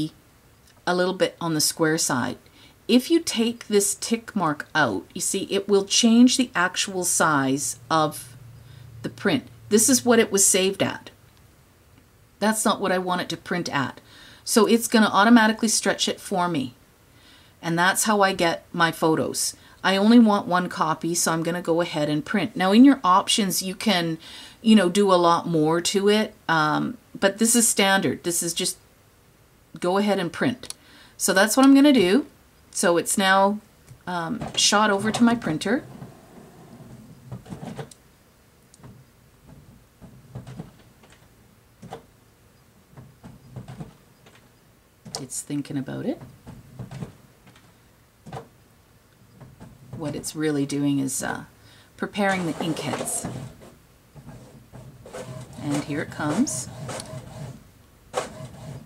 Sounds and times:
Speech: 0.9 - 8.4, 9.1 - 11.2, 12.4 - 16.8, 17.6 - 28.8, 29.8 - 35.9, 45.2 - 46.2, 50.0 - 53.3, 55.6 - 56.7.

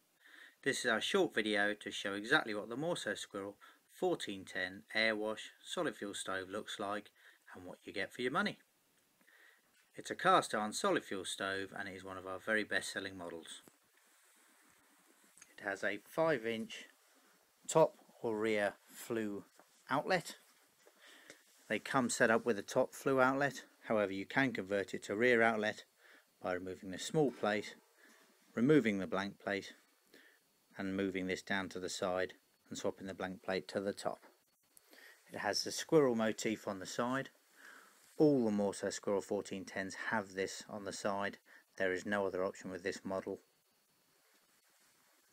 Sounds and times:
Speech: 0.6 - 8.6, 9.9 - 13.7, 15.5 - 16.9, 17.7 - 20.5, 21.7 - 27.8, 28.5 - 29.9, 30.8 - 34.3, 35.3 - 37.4, 38.2 - 43.5.

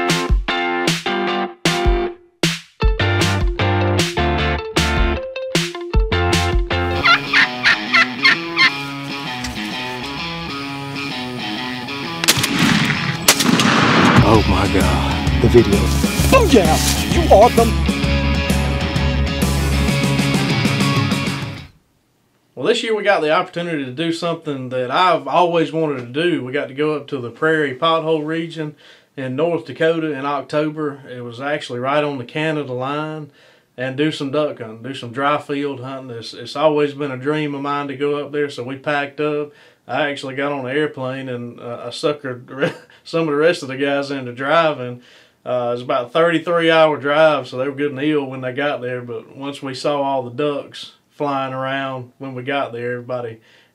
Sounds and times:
Music: 0.0 - 13.2, 14.2 - 21.8
Speech: 14.2 - 17.8, 22.6 - 53.4.

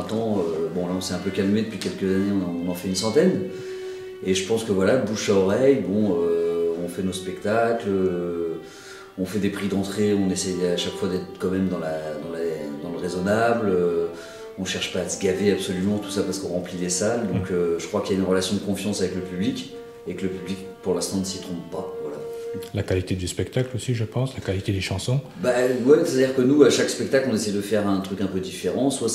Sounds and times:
Speech: 0.0 - 3.5, 4.2 - 8.6, 9.2 - 29.1
Music: 0.0 - 29.1.

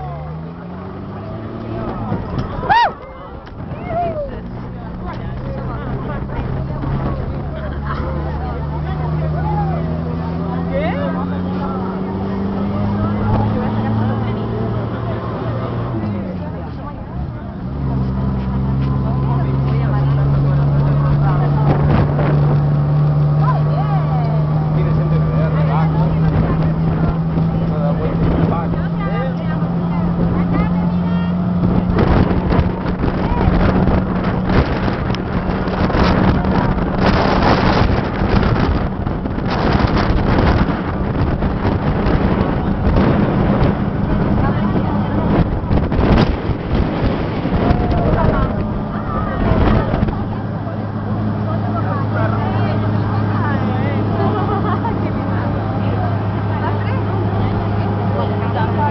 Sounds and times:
Speech: 0.0 - 35.0, 42.4 - 45.6, 47.5 - 58.9
Vehicle: 0.0 - 58.9.

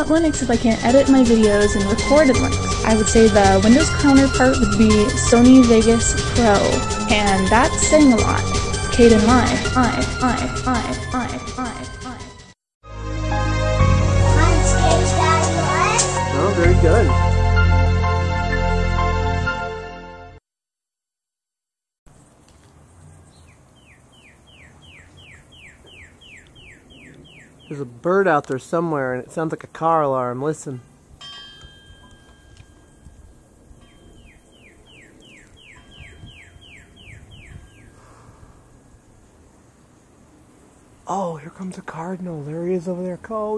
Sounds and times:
Bird vocalization, bird call, bird song: 23.0 - 27.9, 33.8 - 38.0.

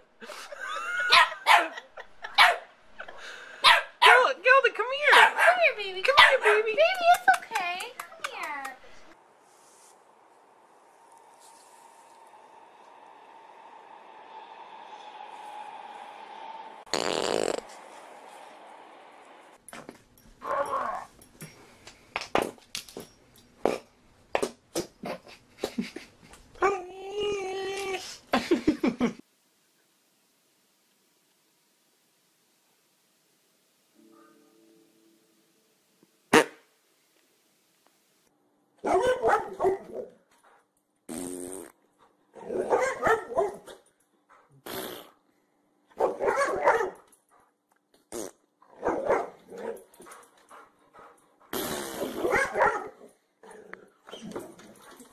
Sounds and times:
Fart: 16.9 - 17.8, 23.6 - 23.9, 36.3 - 36.7, 41.1 - 41.8, 44.6 - 45.2, 48.0 - 48.4, 51.5 - 52.3.

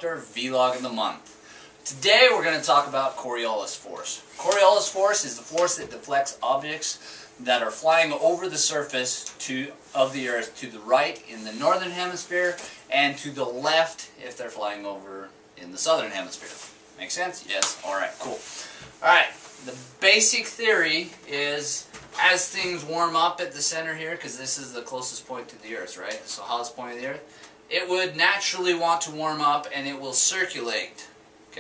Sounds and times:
Speech: 0.0 - 1.2, 1.8 - 31.6.

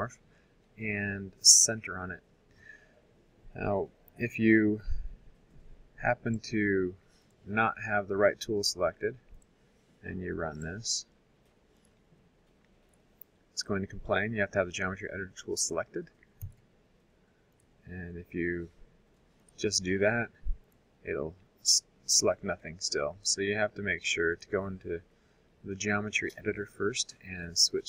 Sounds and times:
Speech: 0.8 - 2.2, 3.5 - 5.0, 6.0 - 9.2, 10.0 - 11.1, 13.6 - 16.1, 17.9 - 18.8, 19.6 - 20.4, 21.1 - 25.0, 25.7 - 27.8.

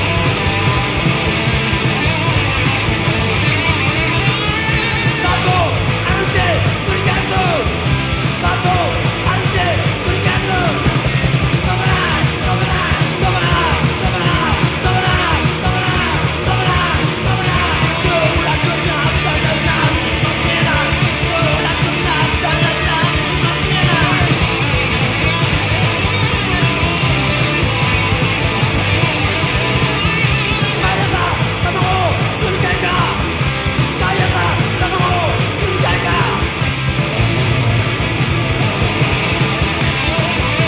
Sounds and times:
Music: 0.0 - 40.6.

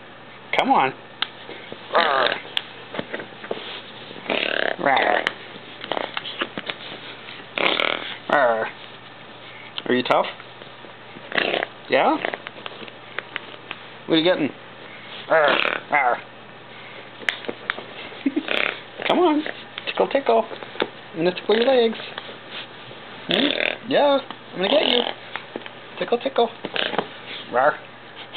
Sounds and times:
Speech: 0.5 - 1.0, 9.8 - 10.4, 11.9 - 12.3, 19.1 - 20.5, 21.2 - 22.0, 23.3 - 25.2, 26.0 - 26.6, 27.5 - 27.8.

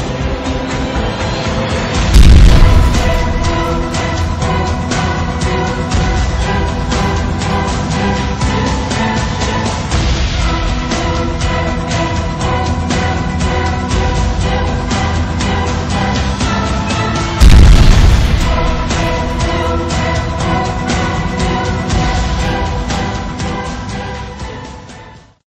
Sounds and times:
Music: 0.0 - 25.4
Explosion: 2.2 - 4.6, 17.4 - 20.0.

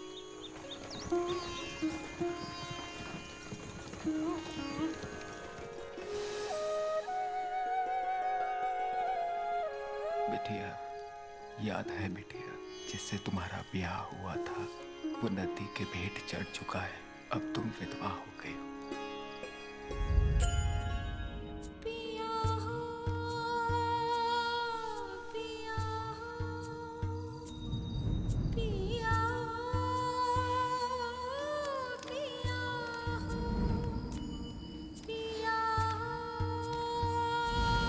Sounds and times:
Music: 0.0 - 37.8.

